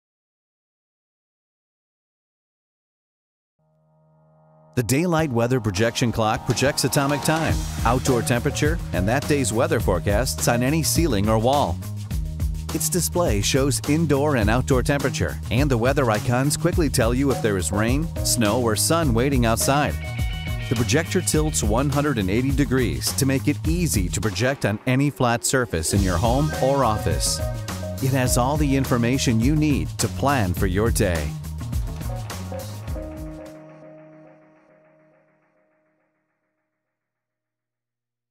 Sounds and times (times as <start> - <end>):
Music: 3.6 - 37.1
Speech: 4.8 - 11.8, 12.7 - 20.0, 20.7 - 27.4, 28.0 - 31.4.